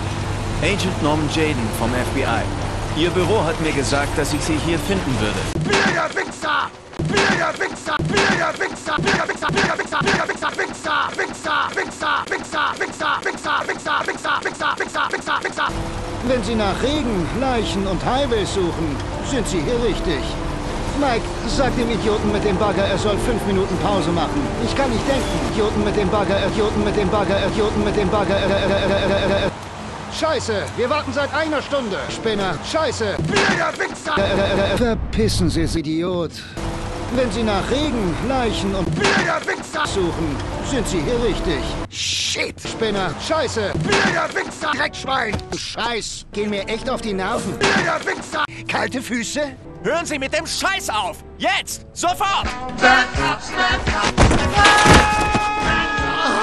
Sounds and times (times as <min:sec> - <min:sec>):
Rain on surface: 0:00.0 - 0:05.7, 0:10.3 - 0:34.8, 0:36.6 - 0:41.9
Music: 0:00.6 - 0:05.7, 0:15.7 - 0:29.5, 0:36.3 - 0:41.9, 0:42.6 - 0:56.4
Speech: 0:00.6 - 0:29.5, 0:30.1 - 0:36.5, 0:37.1 - 0:52.5.